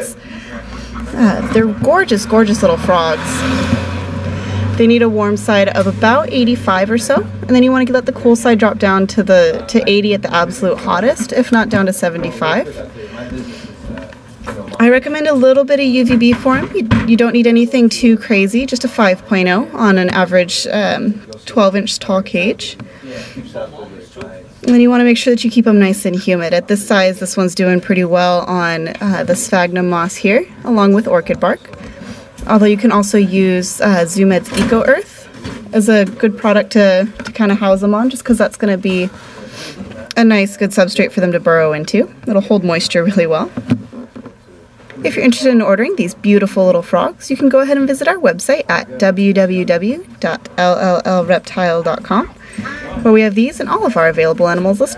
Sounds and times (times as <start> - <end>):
Speech: 1.0 - 3.4, 4.8 - 43.6, 44.9 - 54.9.